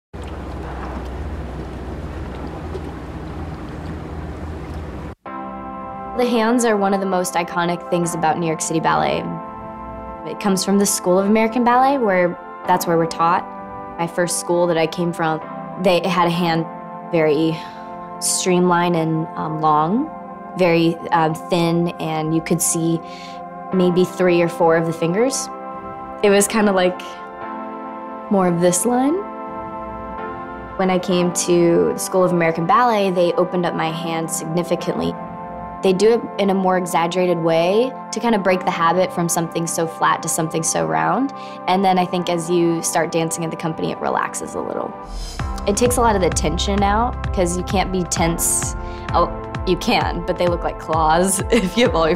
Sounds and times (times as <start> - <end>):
Music: 0.2 - 52.1.